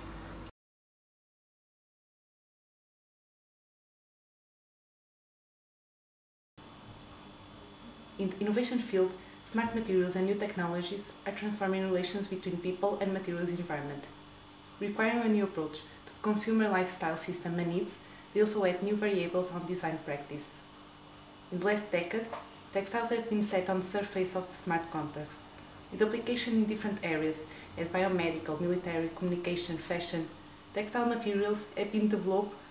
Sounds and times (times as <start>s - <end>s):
Speech: 7.9s - 14.2s, 14.8s - 20.7s, 21.5s - 32.6s.